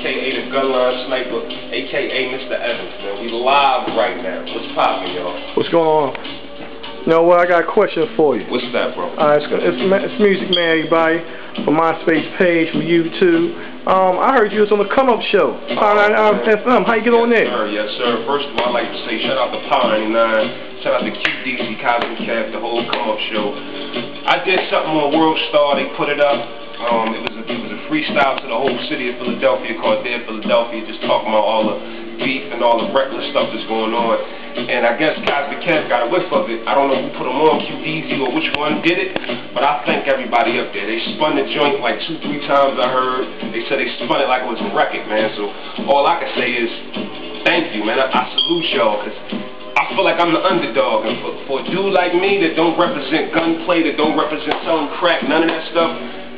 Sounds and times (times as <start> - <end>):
Speech: 0.0 - 6.2, 7.0 - 23.6, 24.3 - 46.8, 47.4 - 49.2, 49.8 - 56.0
Music: 0.0 - 56.3.